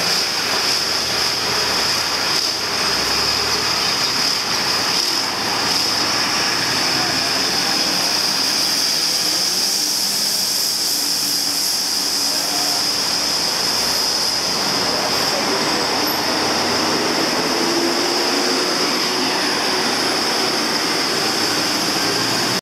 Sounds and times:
Vehicle: 0:00.0 - 0:22.6.

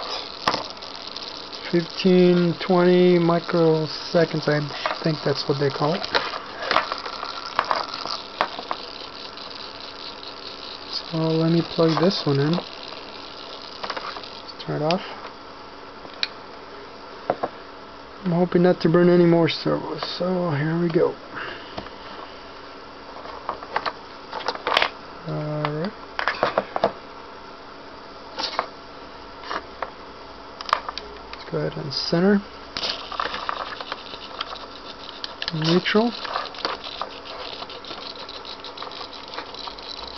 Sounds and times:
Speech: 0:01.7 - 0:06.1, 0:10.9 - 0:12.6, 0:14.6 - 0:15.2, 0:18.2 - 0:21.2, 0:25.2 - 0:26.0, 0:31.4 - 0:32.5, 0:35.5 - 0:36.2.

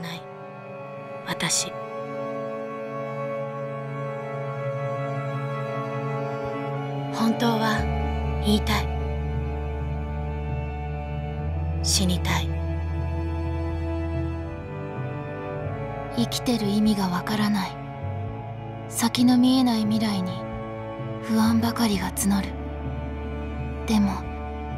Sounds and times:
Music: 0:00.0 - 0:24.7
Speech: 0:07.2 - 0:08.9, 0:11.8 - 0:12.5, 0:16.2 - 0:17.8, 0:19.0 - 0:20.4, 0:21.3 - 0:22.5, 0:23.9 - 0:24.3.

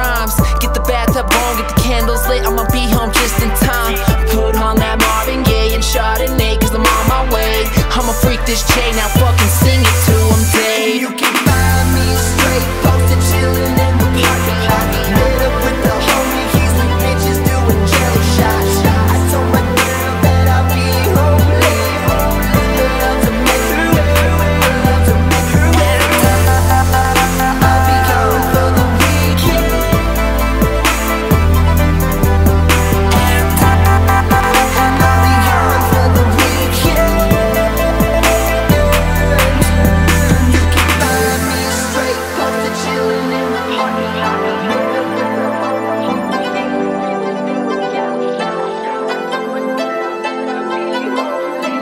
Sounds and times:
Hip hop music: 0:00.0 - 0:51.8
Pop music: 0:00.0 - 0:51.8.

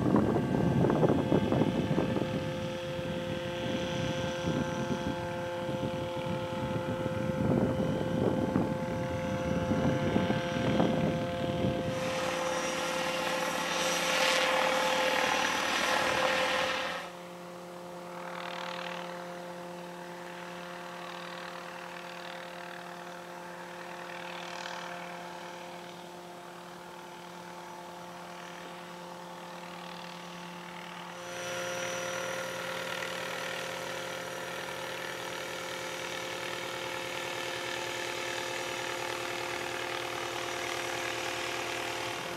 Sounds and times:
Helicopter: 0:00.0 - 0:42.3.

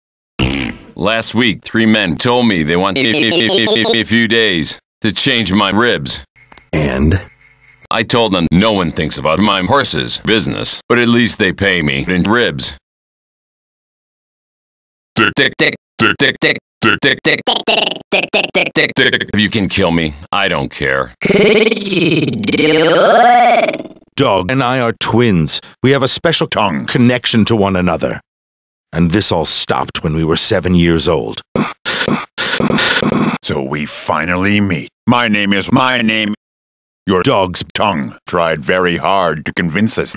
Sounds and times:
Speech: 0:01.0 - 0:07.3, 0:07.9 - 0:12.8, 0:15.2 - 0:17.7, 0:18.6 - 0:23.2, 0:24.2 - 0:28.3, 0:28.9 - 0:31.4, 0:33.4 - 0:36.4, 0:37.1 - 0:40.1.

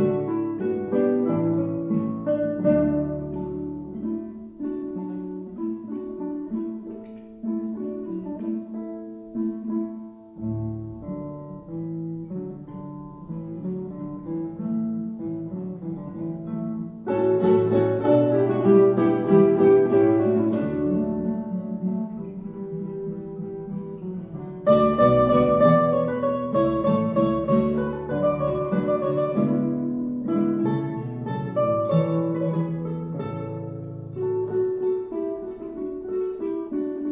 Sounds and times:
Acoustic guitar: 0:00.0 - 0:37.1.

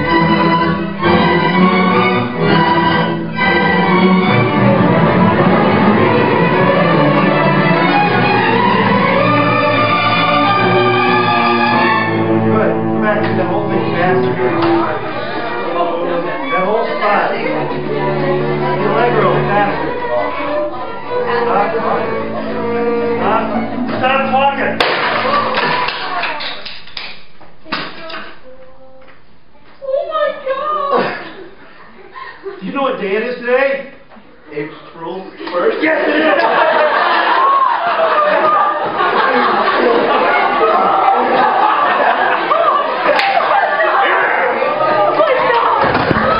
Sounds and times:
Violin, fiddle: 0:00.0 - 0:24.7.

